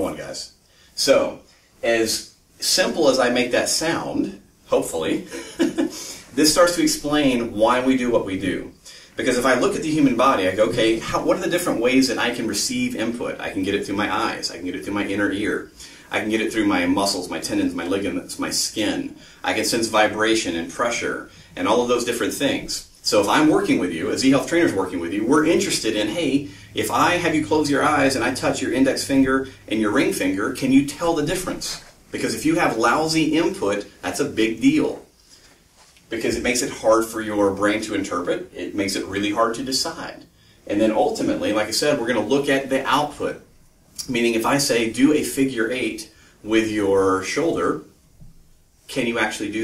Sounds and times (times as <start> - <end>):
Speech: 0.0 - 35.1, 36.1 - 48.0, 48.9 - 49.6.